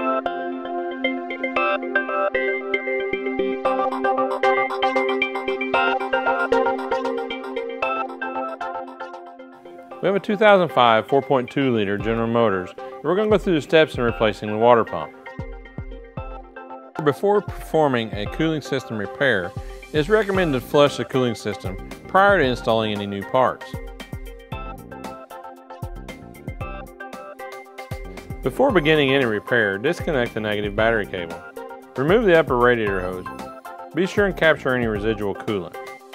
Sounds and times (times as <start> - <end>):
Music: 0.0 - 36.1
Speech: 10.0 - 15.1, 17.0 - 23.8, 28.4 - 31.4, 32.0 - 33.3, 34.0 - 35.8.